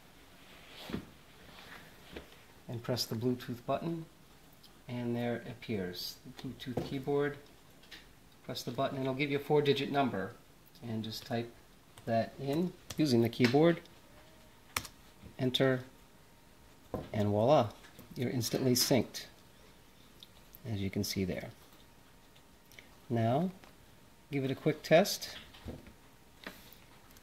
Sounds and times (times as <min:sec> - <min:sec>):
Speech: 0:02.7 - 0:04.1, 0:04.9 - 0:07.4, 0:08.5 - 0:13.9, 0:15.4 - 0:15.9, 0:17.1 - 0:19.4, 0:20.6 - 0:21.6, 0:23.1 - 0:23.6, 0:24.3 - 0:25.5.